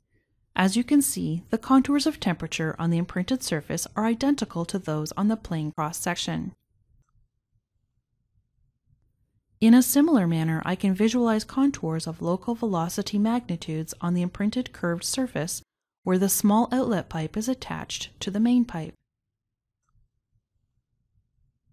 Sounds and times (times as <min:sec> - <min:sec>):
Speech: 0:00.6 - 0:06.6, 0:09.6 - 0:19.0.